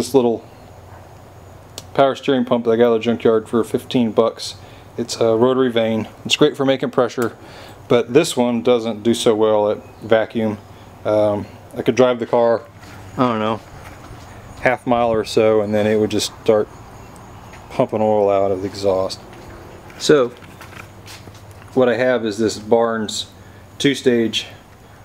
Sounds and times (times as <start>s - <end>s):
Speech: 0.0s - 0.5s, 1.8s - 13.7s, 14.6s - 16.7s, 17.7s - 19.2s, 20.0s - 20.4s, 21.7s - 24.6s.